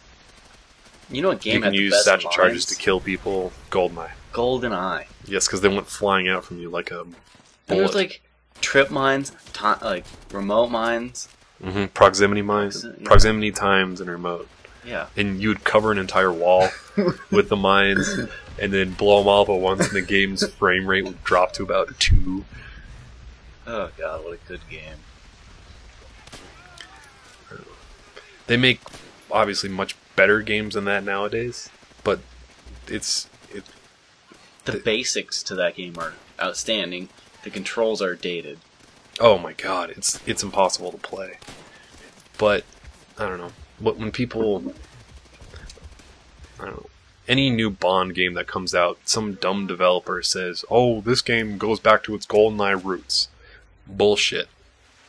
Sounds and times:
Narration, monologue: 0:00.1 - 0:25.4, 0:26.0 - 0:54.7.

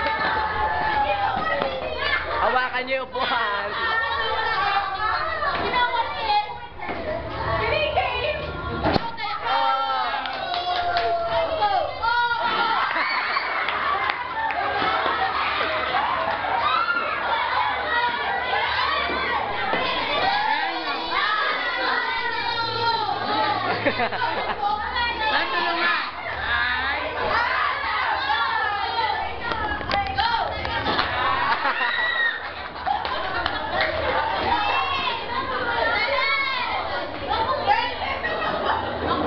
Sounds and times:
Inside, large room or hall: 0:00.0 - 0:39.2.

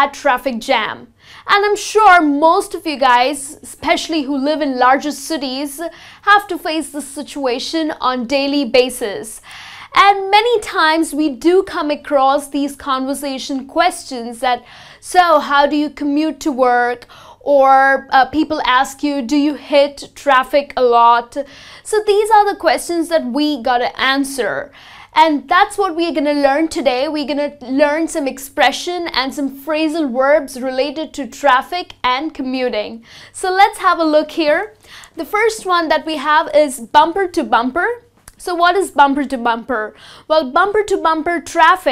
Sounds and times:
Speech: 0:00.0 - 0:09.4, 0:10.0 - 0:41.9.

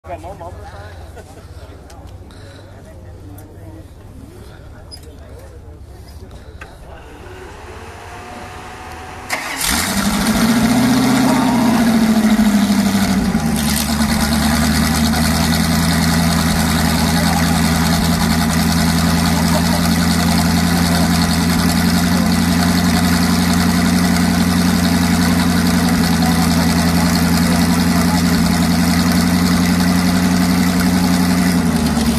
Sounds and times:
Vehicle: 0:00.0 - 0:32.1.

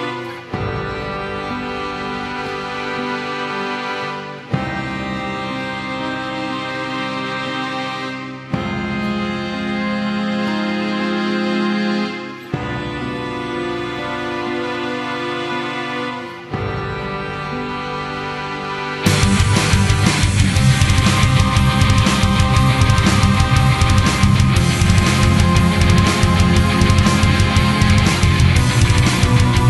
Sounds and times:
Music: 0:00.0 - 0:29.6.

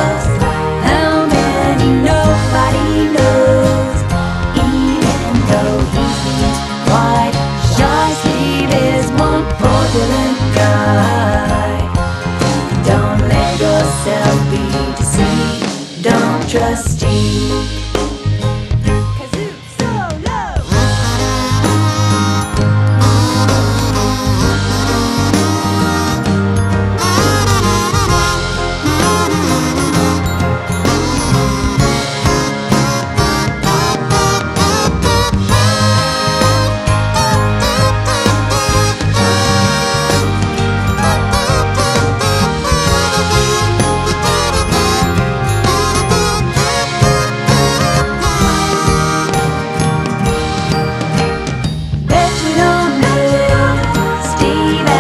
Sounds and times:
Jingle (music): 0:00.0 - 0:55.0.

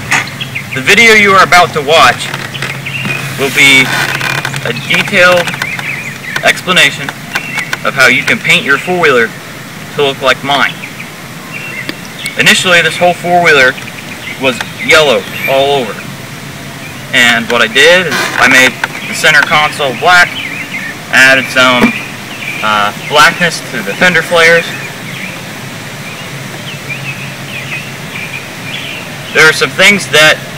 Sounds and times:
Speech: 0:00.8 - 0:02.4, 0:03.4 - 0:04.0, 0:04.6 - 0:05.6, 0:06.4 - 0:07.2, 0:07.8 - 0:10.8, 0:12.4 - 0:13.8, 0:14.4 - 0:16.0, 0:17.1 - 0:20.4, 0:21.1 - 0:22.0, 0:22.6 - 0:24.8, 0:29.4 - 0:30.5.

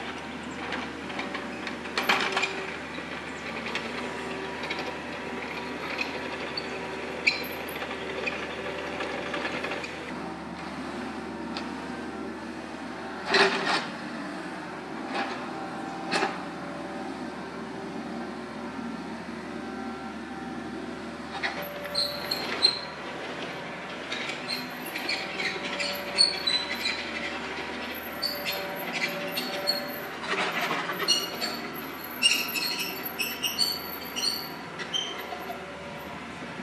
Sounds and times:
Outside, rural or natural: 0:00.0 - 0:20.0, 0:20.6 - 0:36.6
Vehicle: 0:00.0 - 0:36.6.

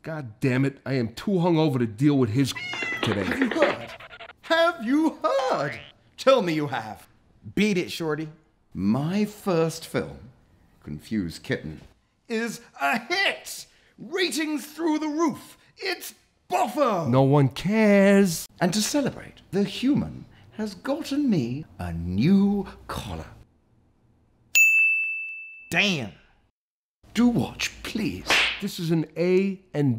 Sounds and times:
Speech: 0:00.0 - 0:03.9, 0:04.5 - 0:23.4, 0:25.7 - 0:26.2, 0:27.1 - 0:29.9.

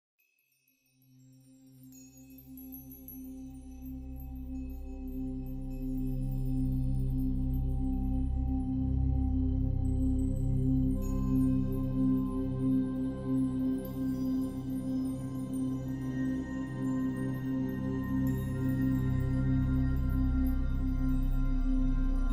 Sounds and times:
Music: 0:00.2 - 0:22.3.

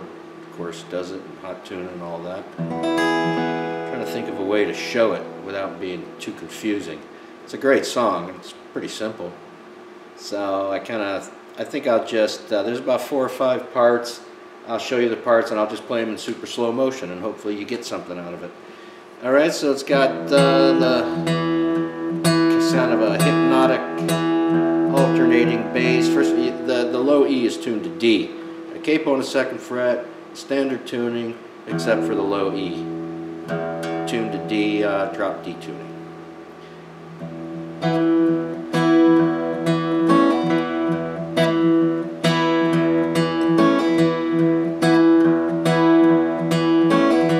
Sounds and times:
Speech: 0:00.0 - 0:02.6, 0:03.9 - 0:09.4, 0:10.2 - 0:18.6, 0:19.2 - 0:21.2, 0:22.5 - 0:24.0, 0:24.9 - 0:32.9, 0:34.1 - 0:35.9
Strum: 0:00.0 - 0:07.3, 0:19.9 - 0:30.6, 0:31.7 - 0:47.3
Acoustic guitar: 0:00.0 - 0:07.4, 0:19.9 - 0:30.6, 0:31.7 - 0:47.3.

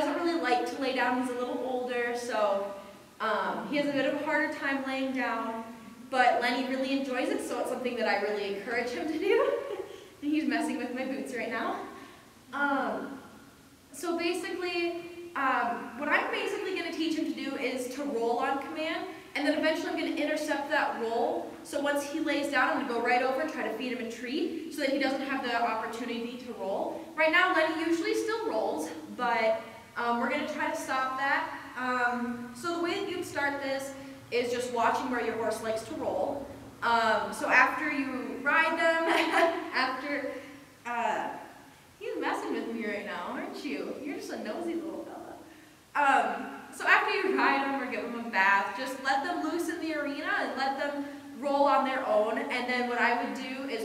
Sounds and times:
Speech: 0:00.0 - 0:13.2, 0:13.9 - 0:53.8.

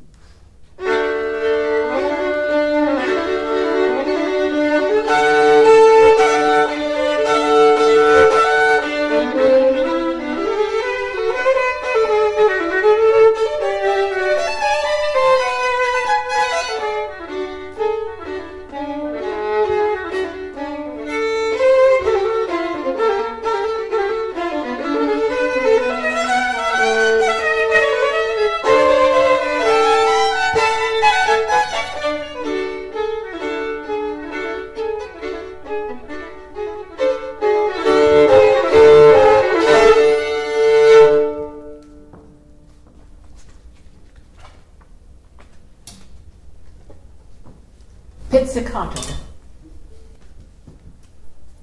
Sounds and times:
Violin, fiddle: 0:00.8 - 0:42.3.

